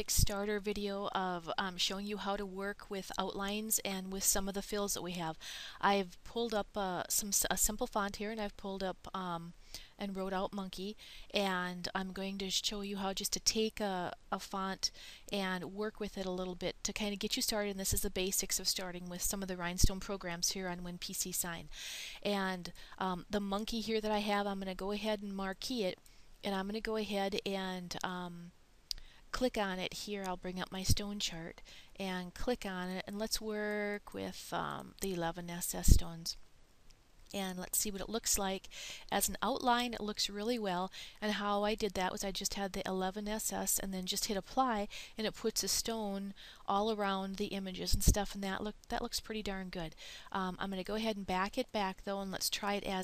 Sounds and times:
Speech: 0:00.0 - 0:28.5, 0:29.4 - 0:36.4, 0:37.3 - 0:53.0.

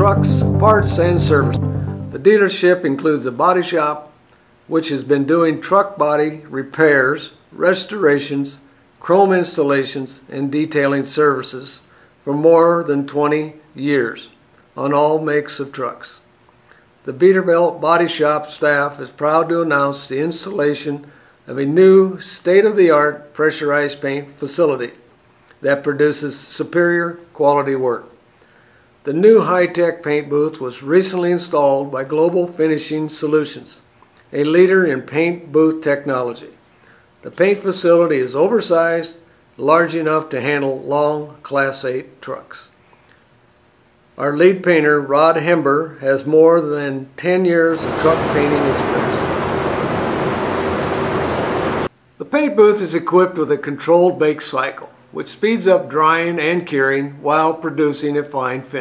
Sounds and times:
Speech: 0:00.0 - 0:01.6, 0:02.2 - 0:16.3, 0:17.0 - 0:28.2, 0:29.0 - 0:36.6, 0:37.2 - 0:42.8, 0:44.2 - 0:49.2, 0:52.2 - 0:58.8.

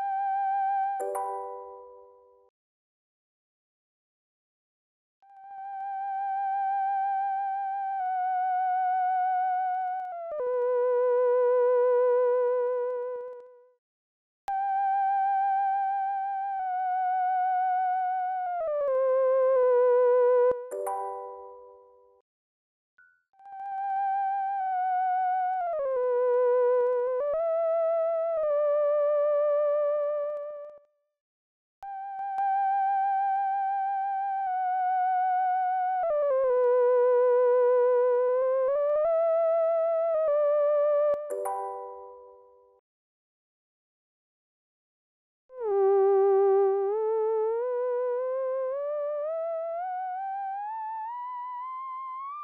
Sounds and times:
Theremin: 0:05.3 - 0:13.5, 0:14.5 - 0:20.8, 0:23.4 - 0:30.8, 0:31.9 - 0:41.5, 0:45.5 - 0:52.4.

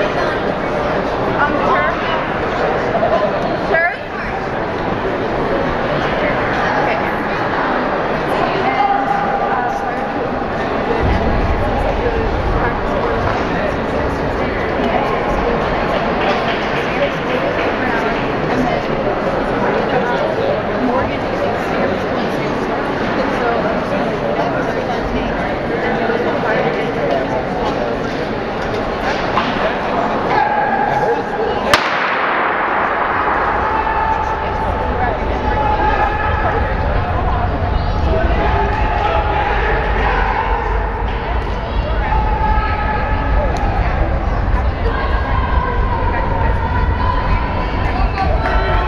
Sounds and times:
Inside, public space: 0:00.0 - 0:48.8
Speech: 0:00.0 - 0:48.8.

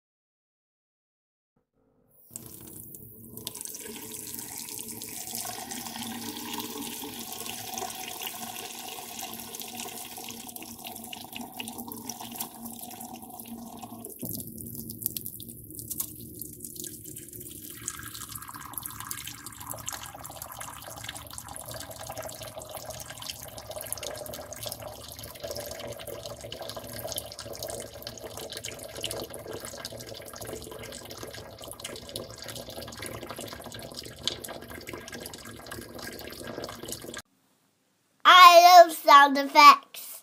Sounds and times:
Sink (filling or washing): 0:02.2 - 0:37.3.

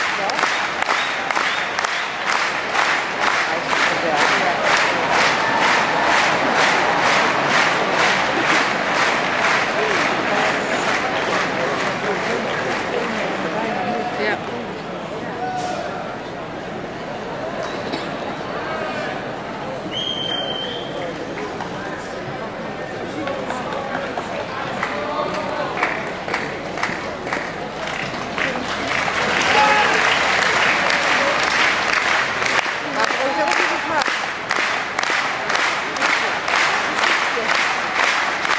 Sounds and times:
Speech: 0:00.0 - 0:01.3, 0:03.2 - 0:38.5.

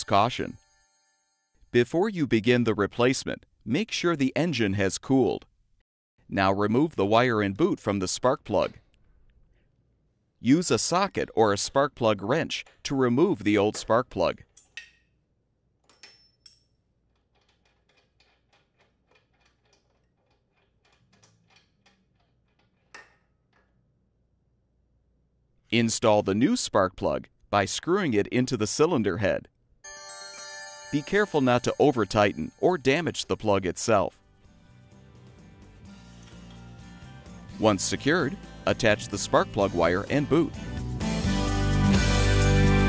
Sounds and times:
Speech: 0:00.0 - 0:00.6, 0:01.8 - 0:05.5, 0:06.3 - 0:08.8, 0:10.4 - 0:14.4, 0:25.7 - 0:29.5, 0:31.0 - 0:34.2, 0:37.6 - 0:40.6.

